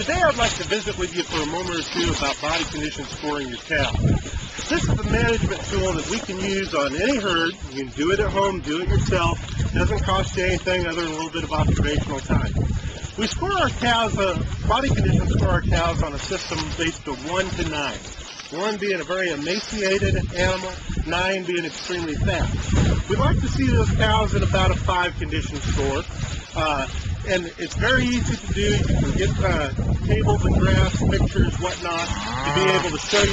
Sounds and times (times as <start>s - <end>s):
Speech: 0.0s - 4.0s, 4.7s - 12.6s, 13.2s - 26.0s, 26.6s - 33.3s.